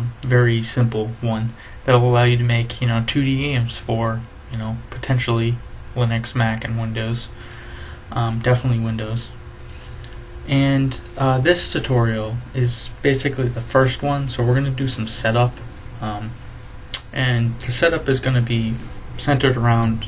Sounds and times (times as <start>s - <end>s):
Speech: 0.0s - 7.4s, 8.1s - 9.4s, 10.5s - 16.4s, 17.0s - 20.0s.